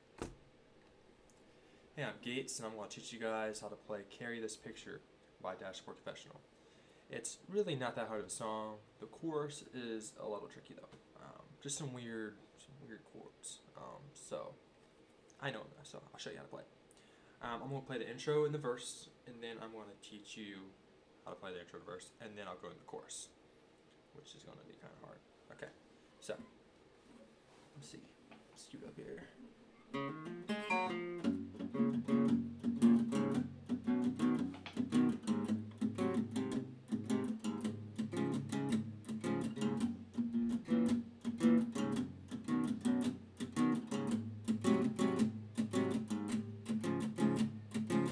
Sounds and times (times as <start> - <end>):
Strum: 29.9 - 48.1.